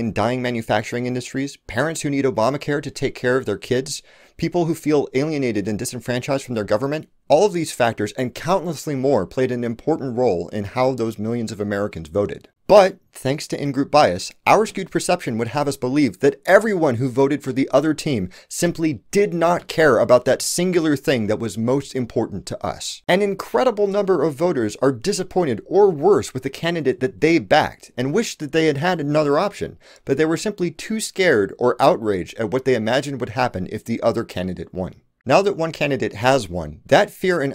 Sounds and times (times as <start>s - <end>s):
Speech: 0.0s - 37.5s.